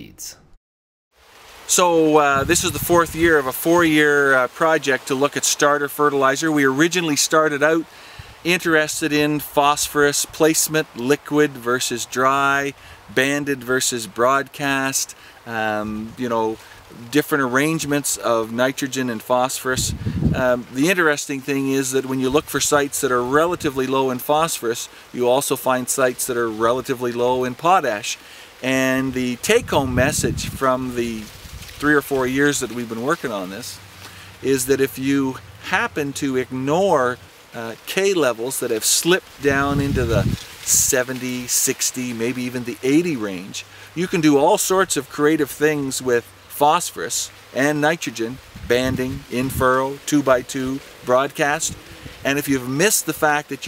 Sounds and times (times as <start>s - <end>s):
Speech: 0.0s - 0.5s, 1.7s - 33.8s, 34.4s - 53.6s.